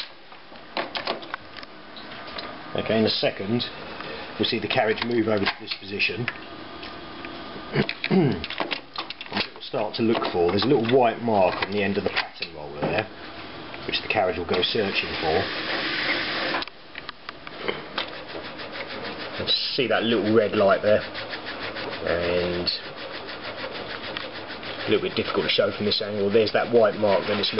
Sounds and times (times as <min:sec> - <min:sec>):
Inside, small room: 0:00.0 - 0:27.5
Speech: 0:02.7 - 0:03.8, 0:04.4 - 0:06.4, 0:09.4 - 0:13.1, 0:13.8 - 0:15.5, 0:19.4 - 0:21.1, 0:22.0 - 0:22.9, 0:24.9 - 0:27.5.